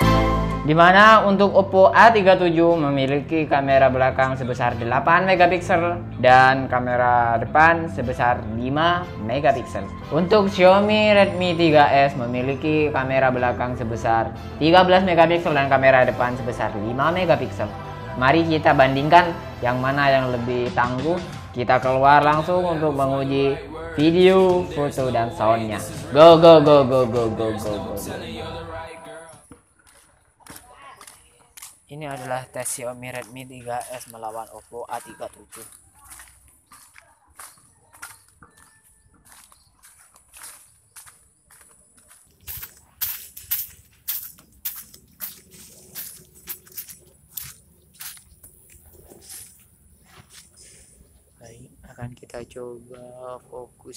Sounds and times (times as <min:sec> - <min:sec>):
Music: 0:00.0 - 0:29.4
Speech: 0:00.7 - 0:29.3, 0:30.6 - 0:36.2, 0:51.4 - 0:53.9.